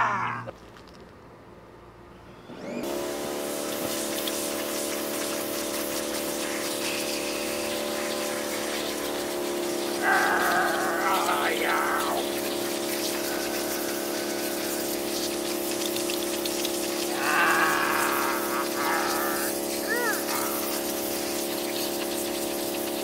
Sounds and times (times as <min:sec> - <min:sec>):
Spray: 0:02.8 - 0:23.0
Speech: 0:10.4 - 0:12.2, 0:18.8 - 0:20.6.